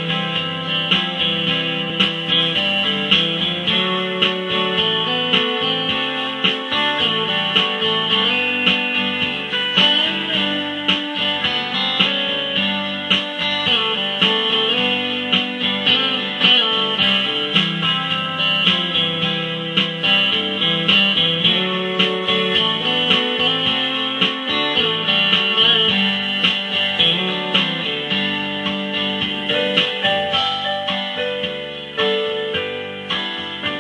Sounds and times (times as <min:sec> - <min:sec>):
Guitar: 0:00.0 - 0:33.8.